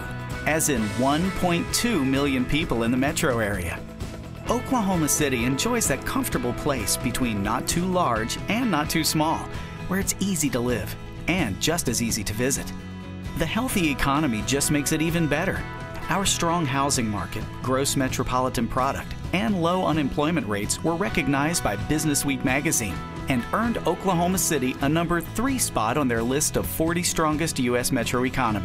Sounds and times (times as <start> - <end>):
Speech: 0.0 - 3.8, 4.5 - 12.8, 13.4 - 28.6
Music: 0.0 - 28.6.